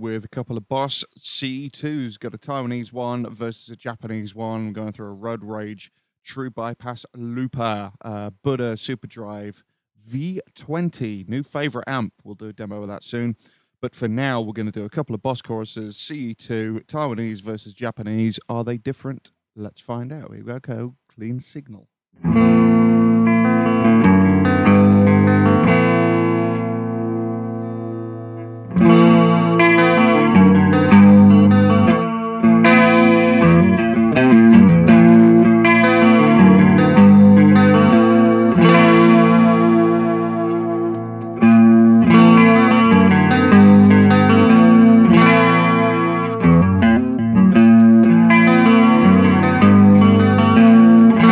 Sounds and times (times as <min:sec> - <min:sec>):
Speech: 0:00.0 - 0:21.9
Distortion: 0:15.6 - 0:51.3
Bass guitar: 0:22.2 - 0:51.3
Electric guitar: 0:22.2 - 0:51.3.